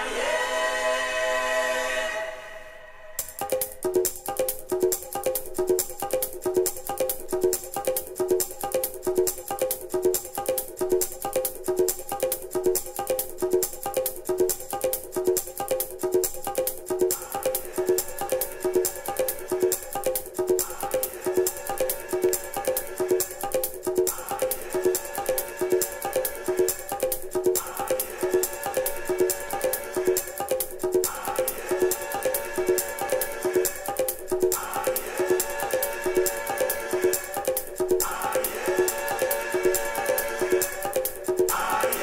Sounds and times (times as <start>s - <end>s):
Music: 0.0s - 42.0s.